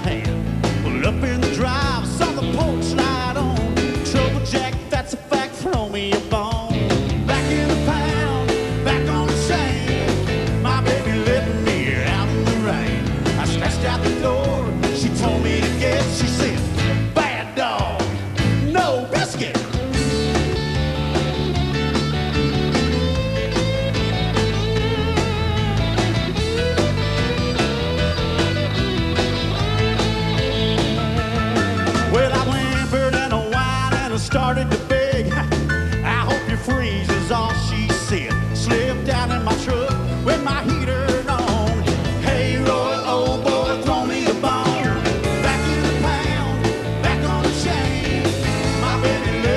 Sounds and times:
Music: 0.0s - 49.5s.

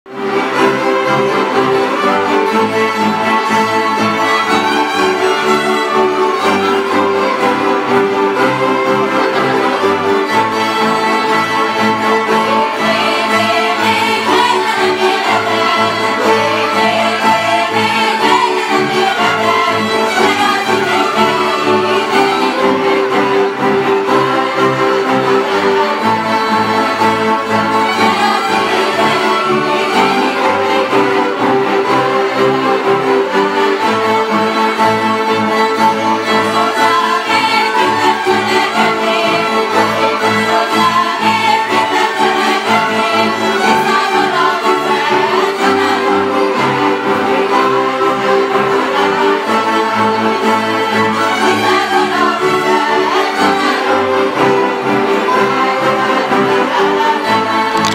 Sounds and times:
Orchestra: 0.0s - 57.9s
Violin, fiddle: 0.0s - 57.9s
Classical music: 0.1s - 57.9s.

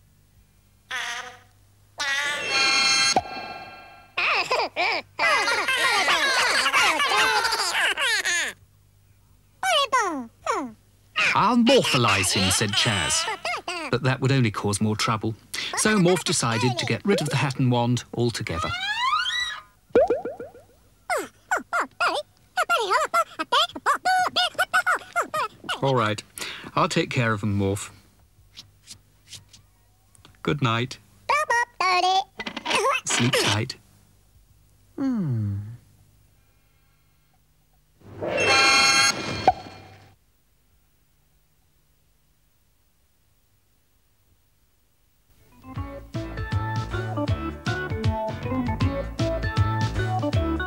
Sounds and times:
Speech: 9.6s - 18.8s, 25.7s - 28.0s.

